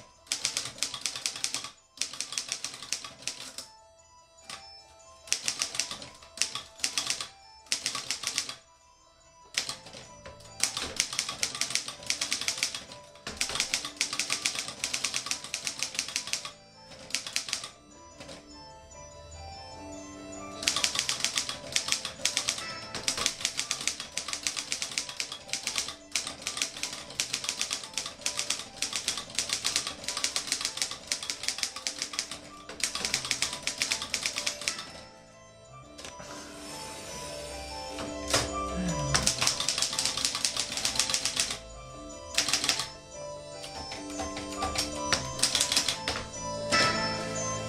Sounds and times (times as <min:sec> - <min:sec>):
Typewriter: 0:00.0 - 0:03.7, 0:05.3 - 0:08.6, 0:09.5 - 0:18.4, 0:20.6 - 0:35.0, 0:38.3 - 0:41.7, 0:42.3 - 0:43.0, 0:43.6 - 0:46.9
Music: 0:00.0 - 0:47.6.